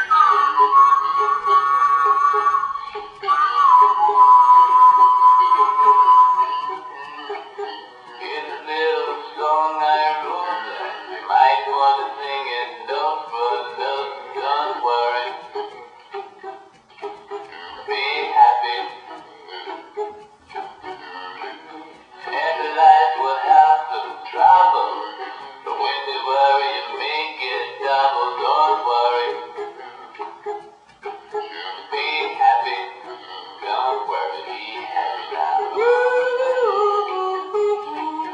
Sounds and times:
Music: 0.0 - 38.3
Synthetic singing: 0.0 - 38.3.

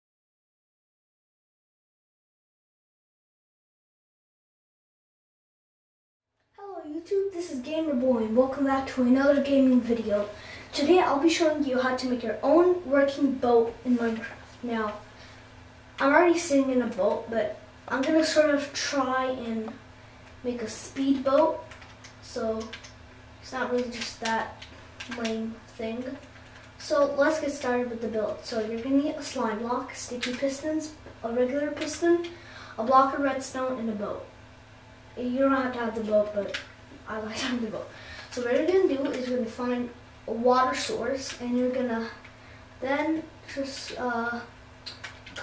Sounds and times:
Speech: 6.6 - 15.1, 16.0 - 19.8, 20.4 - 22.8, 23.4 - 34.3, 35.2 - 44.5.

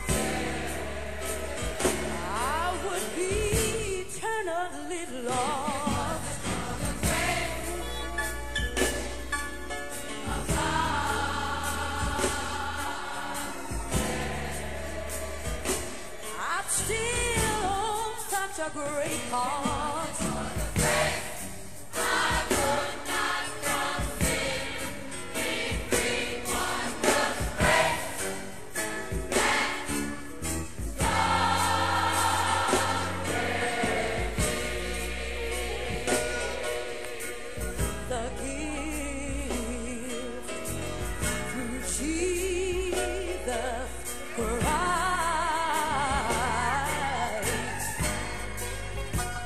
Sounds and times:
Gospel music: 0.0 - 49.4.

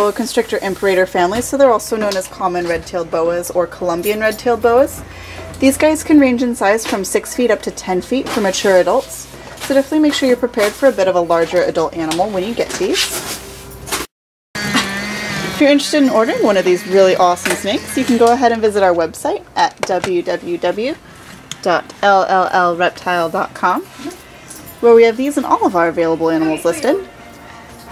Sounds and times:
Speech: 0.0 - 5.0, 5.6 - 13.2, 15.6 - 21.0, 21.6 - 24.2, 24.8 - 27.1.

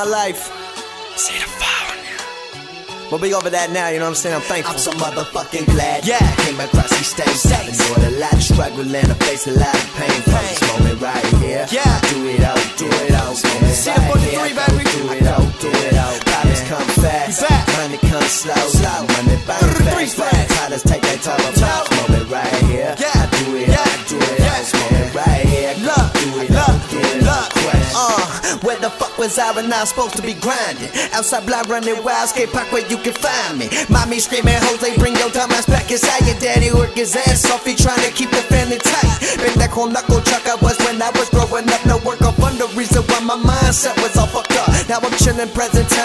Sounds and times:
Dance music: 0.0 - 46.0
Exciting music: 0.1 - 46.0.

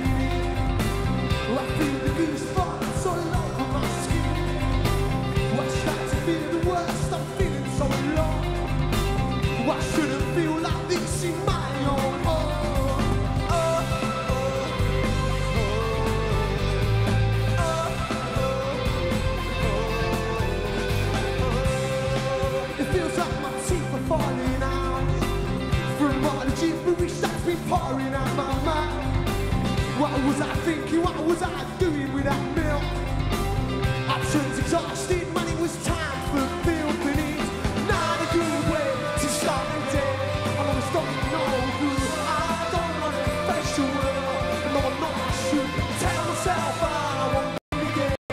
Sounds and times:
Music: 0.0 - 48.3.

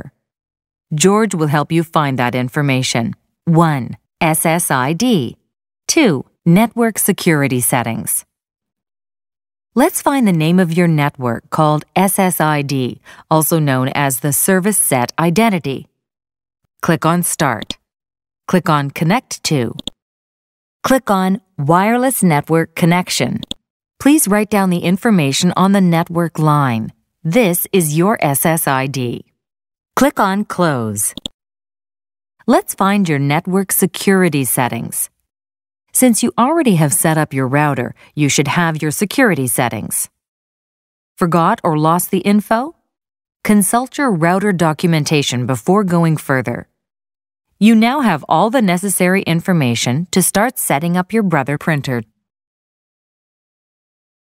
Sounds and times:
Speech: 0.9 - 8.3, 9.8 - 15.9, 16.8 - 17.8, 18.5 - 19.9, 20.8 - 29.3, 30.0 - 31.2, 32.4 - 35.2, 35.9 - 40.1, 41.2 - 42.8, 43.4 - 46.7, 47.6 - 52.2.

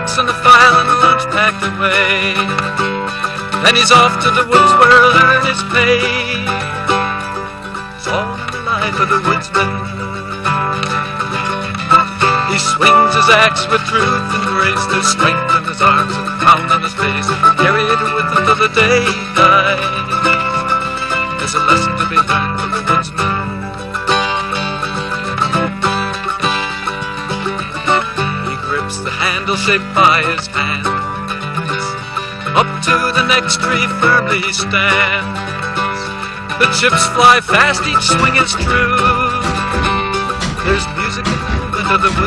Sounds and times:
Music: 0.0 - 42.2.

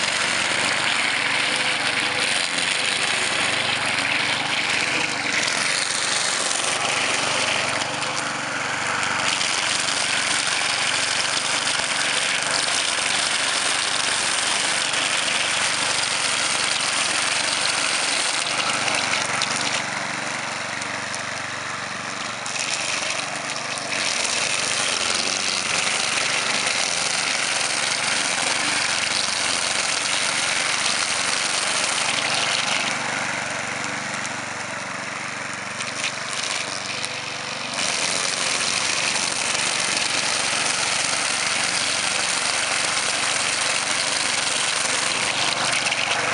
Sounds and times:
Lawn mower: 0.0 - 46.3
Vehicle: 0.0 - 46.3.

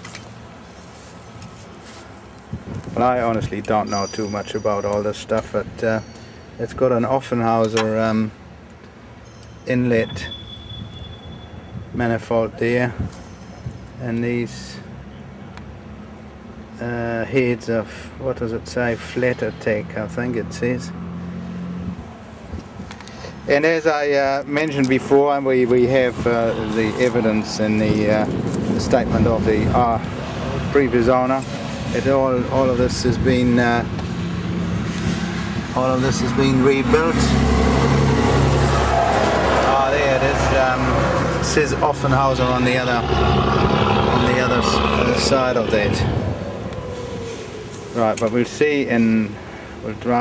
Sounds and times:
Outside, rural or natural: 0.0 - 50.2
Vehicle: 0.0 - 50.2
Speech: 3.0 - 6.0, 6.6 - 8.4, 9.7 - 10.3, 12.0 - 13.0, 14.0 - 14.9, 16.8 - 21.0, 23.5 - 33.9, 35.8 - 37.4, 39.7 - 43.2, 44.1 - 46.2, 48.0 - 50.2.

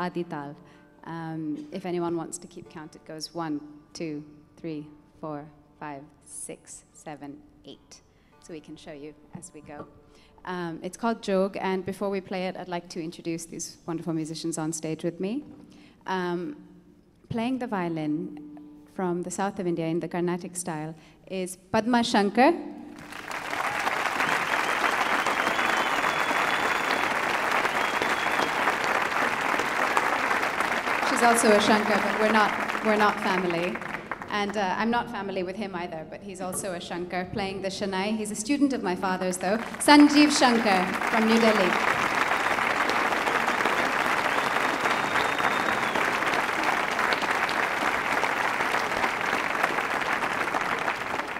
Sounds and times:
Speech: 0.0 - 9.9, 10.5 - 15.5, 17.3 - 18.3, 19.0 - 22.7, 31.1 - 41.8.

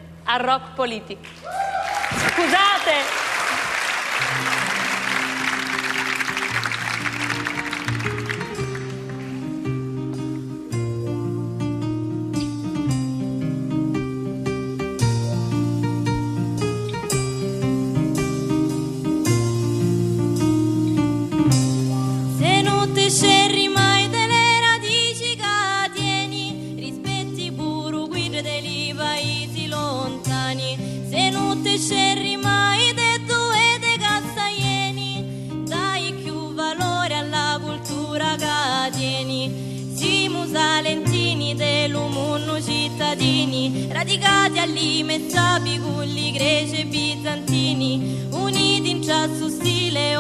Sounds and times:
Music: 0.0 - 50.2.

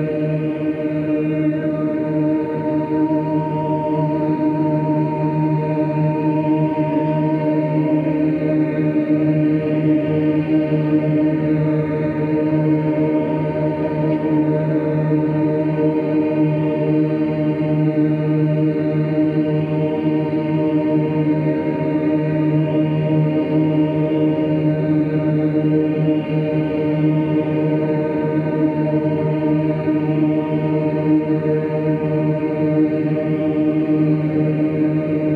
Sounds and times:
Music: 0.0 - 35.3.

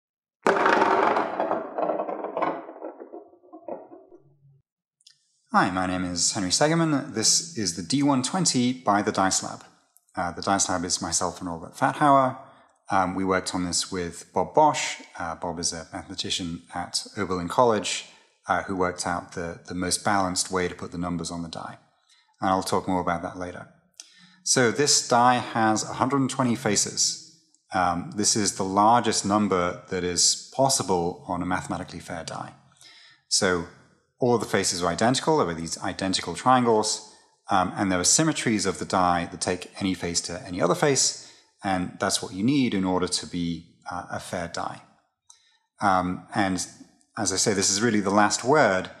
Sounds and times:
Inside, small room: 0.4 - 49.0
Speech: 5.5 - 21.8, 22.4 - 32.6, 33.3 - 44.8, 45.8 - 49.0.

